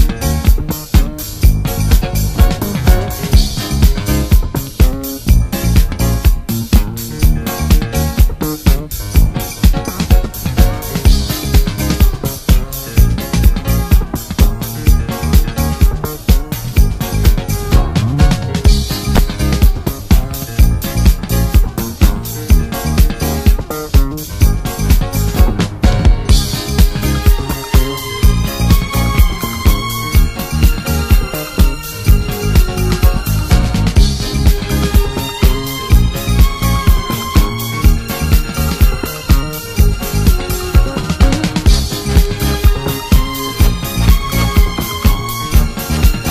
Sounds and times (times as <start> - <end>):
Funk: 0.0 - 46.3.